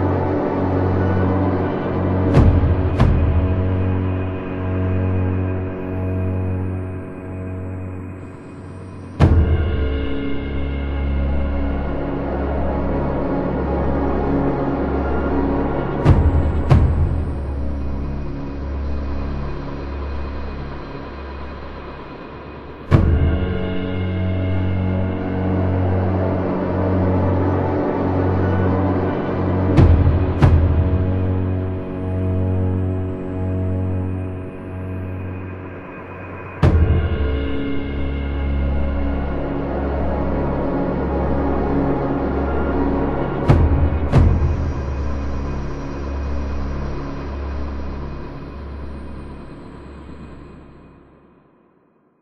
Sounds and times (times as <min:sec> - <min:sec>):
Scary music: 0:00.0 - 0:51.7.